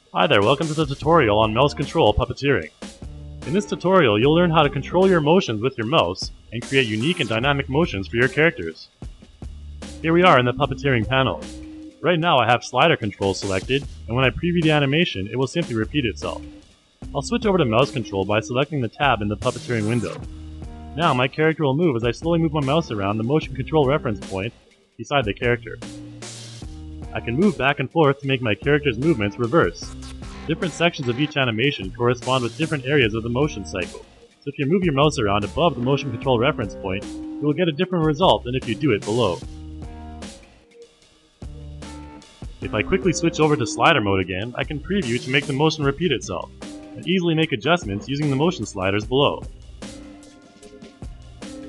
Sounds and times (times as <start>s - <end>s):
Music: 0.0s - 51.6s
Speech: 0.2s - 2.7s, 3.5s - 8.9s, 10.0s - 16.4s, 17.2s - 20.2s, 21.0s - 25.8s, 27.2s - 29.9s, 30.5s - 39.4s, 42.6s - 49.5s.